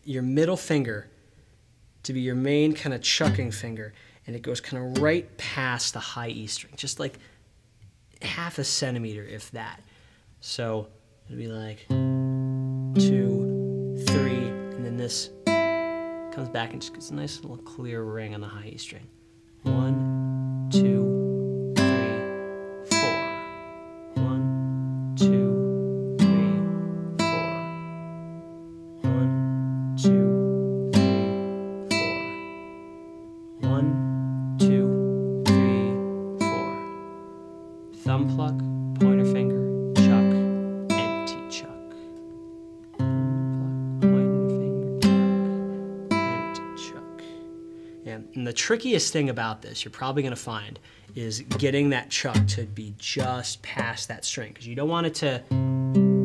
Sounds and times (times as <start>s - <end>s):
Strum: 11.9s - 48.4s.